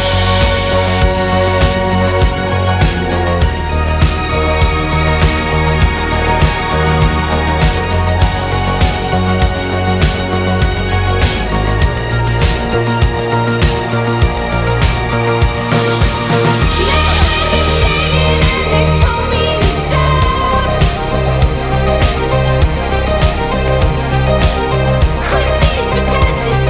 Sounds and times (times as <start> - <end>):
Background music: 0.0 - 26.6.